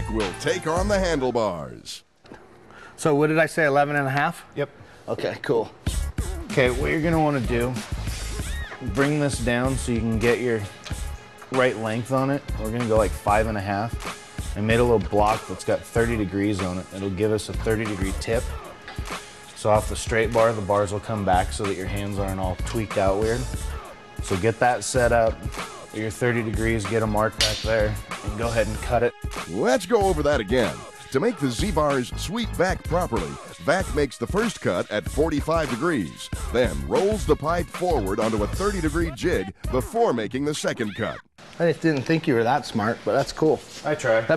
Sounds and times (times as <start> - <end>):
Music: 0.0 - 1.7, 5.4 - 44.3
Speech: 6.5 - 7.8, 8.8 - 10.7, 11.5 - 14.0, 14.6 - 18.5, 19.6 - 23.5, 24.3 - 44.3.